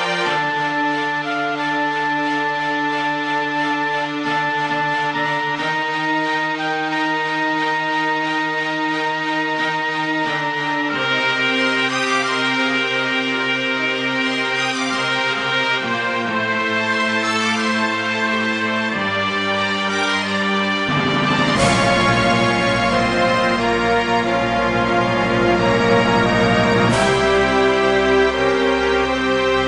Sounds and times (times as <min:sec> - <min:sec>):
Soul music: 0:00.0 - 0:29.6.